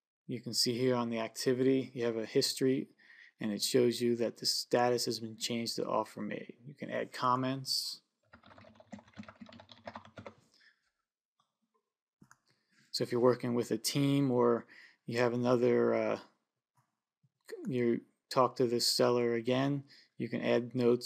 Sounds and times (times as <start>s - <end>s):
Typing: 8.3s - 10.4s.